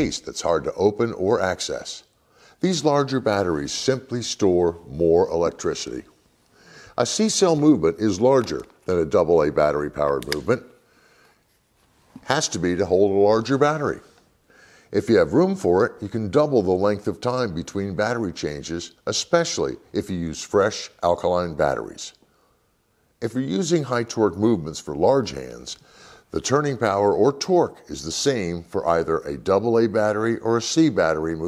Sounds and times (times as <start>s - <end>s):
Speech: 0.0s - 6.1s, 6.9s - 10.8s, 12.2s - 14.2s, 14.9s - 22.2s, 23.2s - 31.4s.